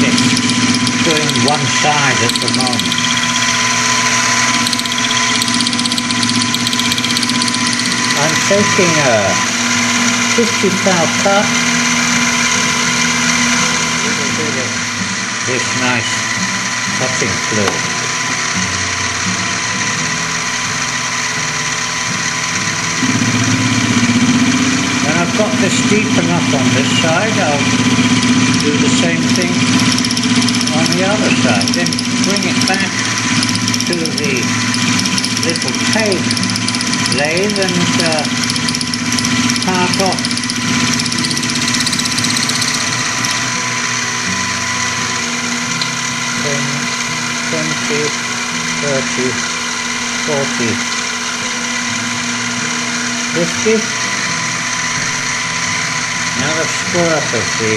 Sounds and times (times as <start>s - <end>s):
Power tool: 0.0s - 57.7s
Speech: 1.0s - 2.9s, 8.2s - 9.5s, 10.4s - 11.6s, 14.0s - 14.8s, 15.5s - 16.3s, 17.0s - 17.9s, 25.0s - 27.7s, 28.6s - 29.7s, 30.7s - 33.0s, 33.9s - 34.6s, 35.4s - 36.3s, 37.2s - 38.3s, 39.7s - 40.2s, 46.4s - 46.8s, 47.5s - 48.2s, 48.8s - 49.4s, 50.2s - 50.8s, 53.4s - 54.0s, 56.4s - 57.7s.